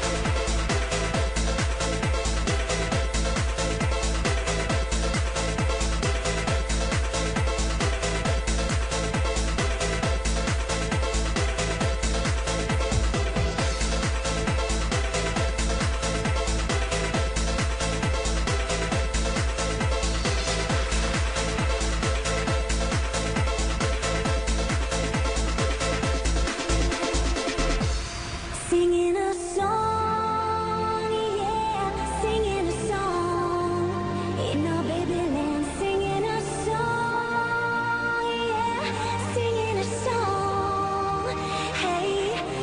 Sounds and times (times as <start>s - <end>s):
Techno: 0.0s - 42.6s.